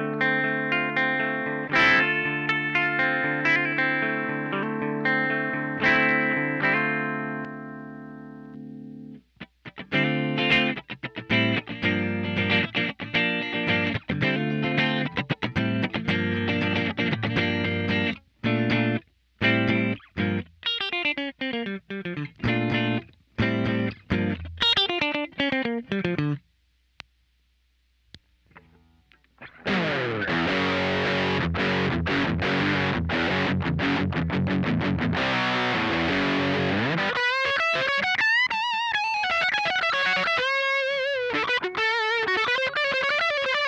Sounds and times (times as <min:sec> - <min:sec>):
Guitar: 0:00.0 - 0:26.5, 0:28.1 - 0:43.6
Effects unit: 0:00.0 - 0:43.6
Inside, small room: 0:00.0 - 0:43.6.